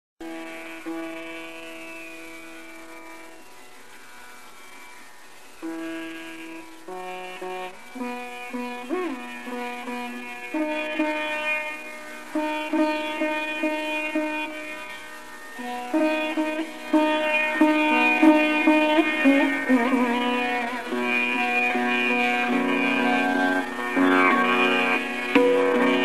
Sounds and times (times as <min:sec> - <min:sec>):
Sitar: 0:00.2 - 0:26.0.